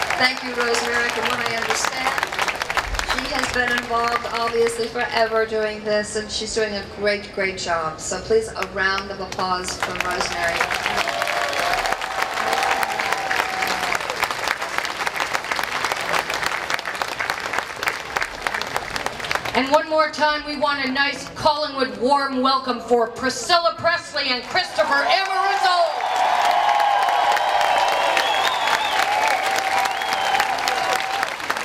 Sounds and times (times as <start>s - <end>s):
Applause: 0.0s - 5.1s, 8.6s - 19.9s, 24.4s - 31.6s.